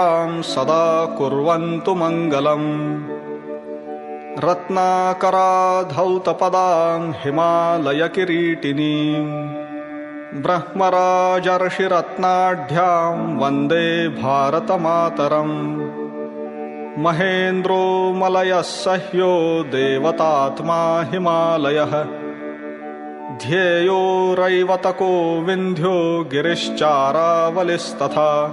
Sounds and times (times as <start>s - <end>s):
Mantra: 0.0s - 3.1s, 4.4s - 9.6s, 10.3s - 15.9s, 17.0s - 22.2s, 23.3s - 28.5s.